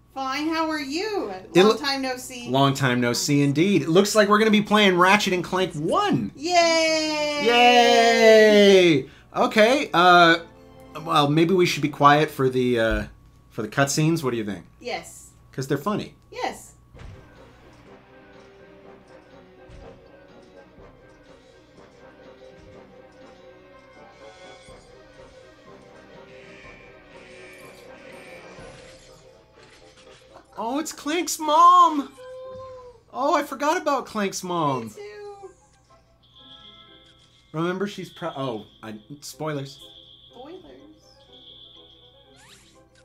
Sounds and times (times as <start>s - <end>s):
Music: 0.0s - 13.4s, 16.2s - 43.0s.